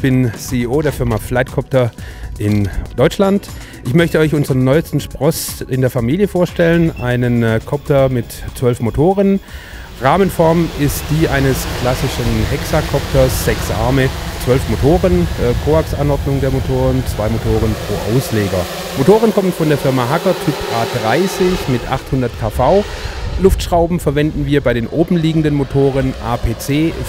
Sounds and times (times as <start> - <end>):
Speech: 0.0 - 9.4, 10.0 - 27.0.